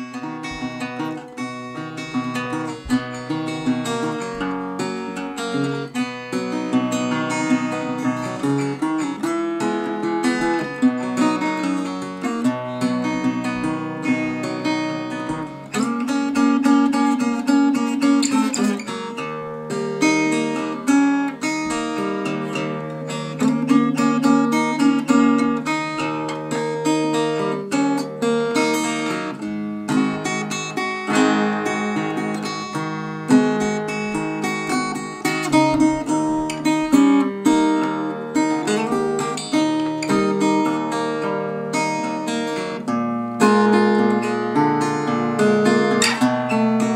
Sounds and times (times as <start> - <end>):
Acoustic guitar: 0.0 - 46.9
Strum: 0.0 - 46.9.